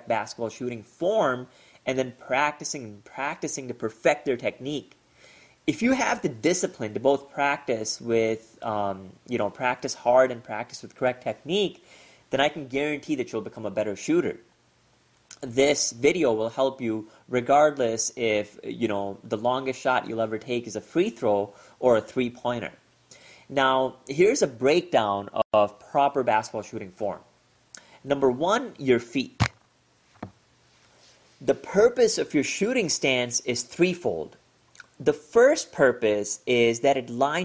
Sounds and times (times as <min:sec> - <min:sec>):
Speech: 0:00.0 - 0:05.0, 0:05.7 - 0:14.5, 0:15.3 - 0:22.8, 0:23.5 - 0:27.3, 0:28.0 - 0:29.4, 0:31.4 - 0:37.4
Basketball bounce: 0:29.4 - 0:29.6.